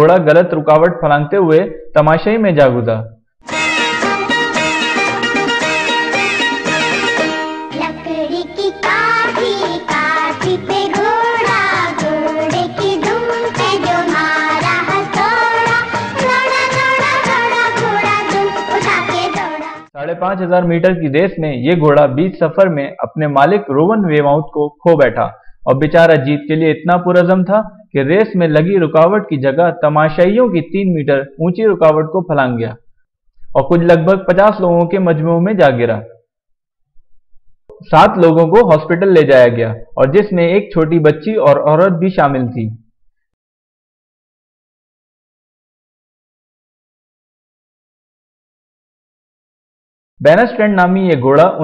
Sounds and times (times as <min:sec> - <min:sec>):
Speech: 0:00.0 - 0:03.2, 0:20.0 - 0:32.8, 0:33.6 - 0:36.2, 0:37.7 - 0:42.8, 0:50.2 - 0:51.6.